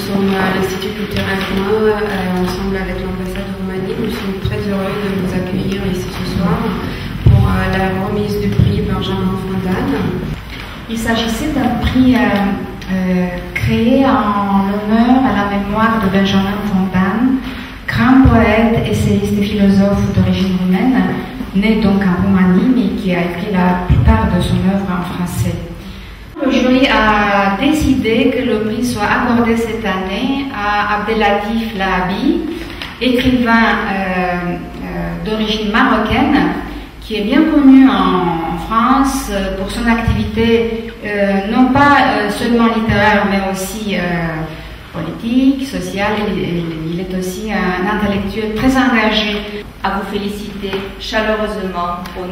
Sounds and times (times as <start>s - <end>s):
Speech: 0.0s - 25.8s, 26.4s - 52.3s.